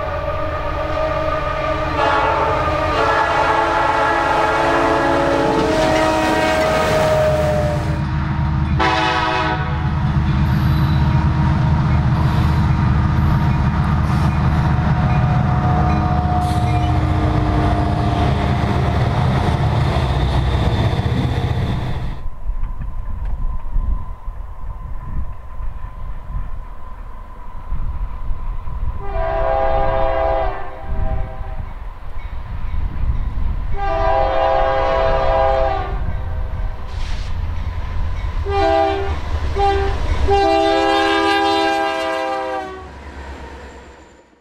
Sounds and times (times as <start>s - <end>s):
Train horn: 0.0s - 8.0s, 8.8s - 10.0s, 29.0s - 31.7s, 33.7s - 36.4s, 38.4s - 43.0s
Railroad car, train wagon: 0.0s - 44.4s.